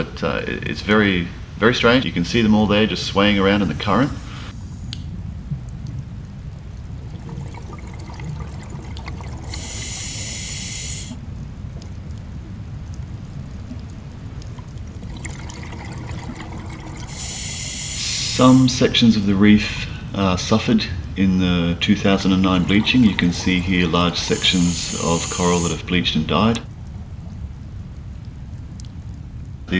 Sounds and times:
Trickle, dribble: 5.5s - 29.7s.

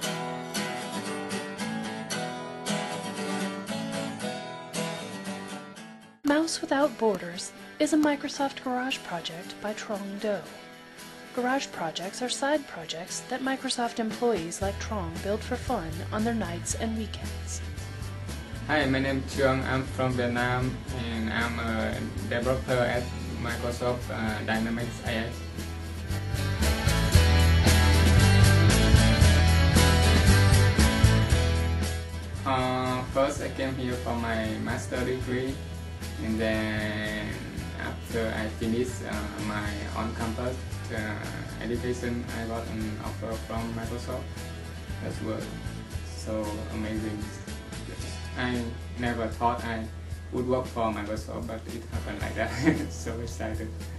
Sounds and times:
Music: 0.0s - 53.9s
Speech: 6.3s - 10.5s, 11.4s - 17.6s, 18.7s - 25.4s, 32.5s - 35.6s, 36.2s - 44.2s, 45.0s - 45.6s, 46.2s - 47.4s, 48.0s - 53.7s.

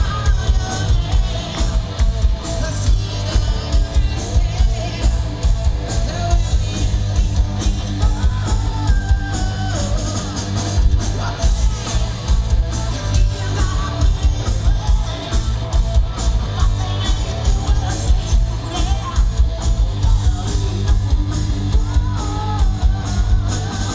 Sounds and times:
Music: 0.0s - 23.9s.

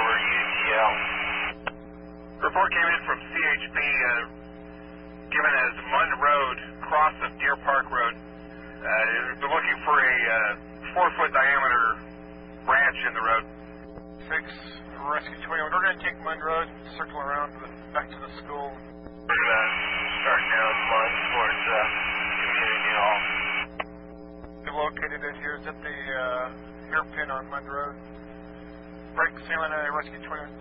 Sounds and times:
Speech: 0.0s - 1.1s, 2.4s - 4.4s, 5.3s - 8.2s, 8.8s - 12.0s, 12.7s - 13.5s, 14.2s - 23.3s, 24.6s - 28.0s, 29.2s - 30.6s.

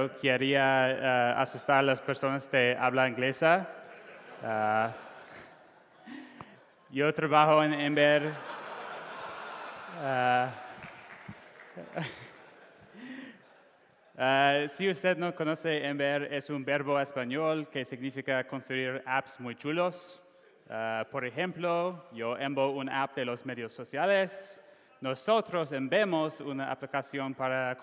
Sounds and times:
Speech: 0.0s - 3.7s, 4.4s - 5.0s, 6.9s - 8.4s, 10.0s - 10.6s, 14.2s - 27.8s.

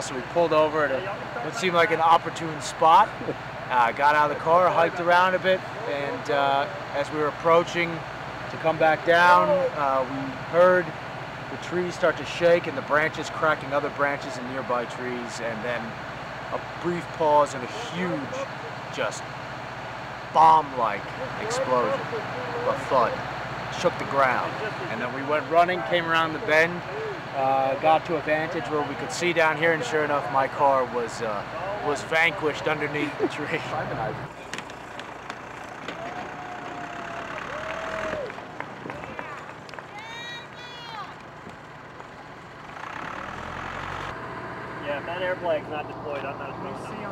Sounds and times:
Speech: 0.0s - 10.9s, 11.5s - 16.0s, 16.6s - 19.2s, 20.4s - 34.3s, 44.8s - 47.1s
Vehicle: 0.0s - 47.1s.

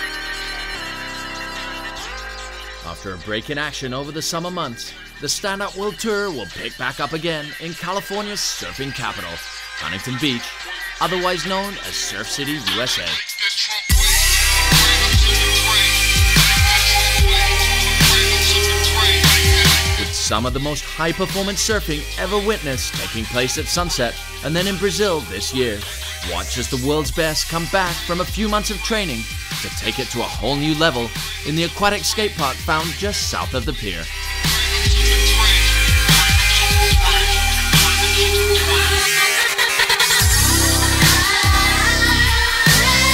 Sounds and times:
Music: 0.0s - 43.1s
Speech: 2.8s - 13.2s, 20.0s - 34.1s.

